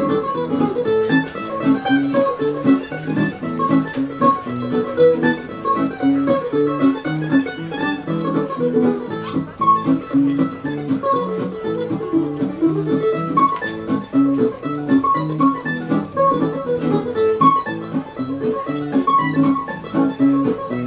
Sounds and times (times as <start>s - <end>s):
Pizzicato: 0.0s - 20.8s.